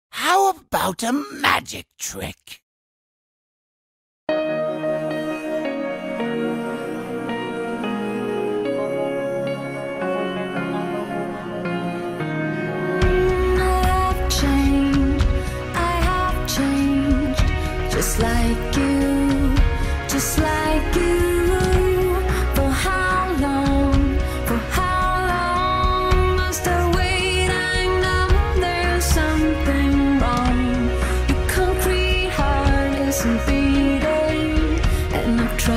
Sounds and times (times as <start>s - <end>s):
Speech: 0.1s - 2.6s
Music: 4.3s - 35.7s.